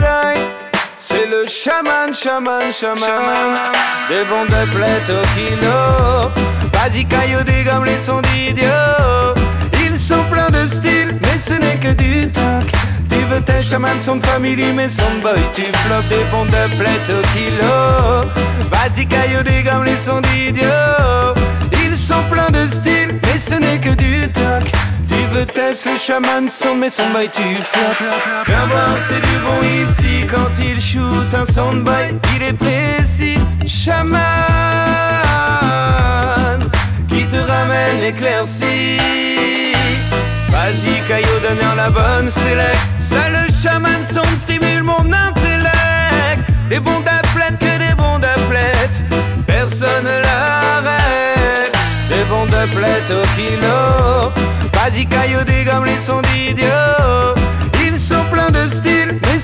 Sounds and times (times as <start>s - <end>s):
Music: 0.0s - 59.4s.